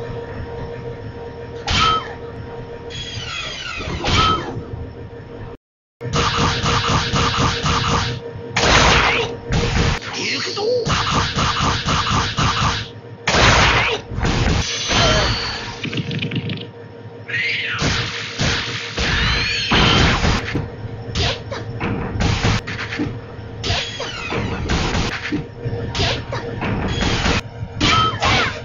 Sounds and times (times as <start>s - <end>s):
Music: 18.0s - 28.6s.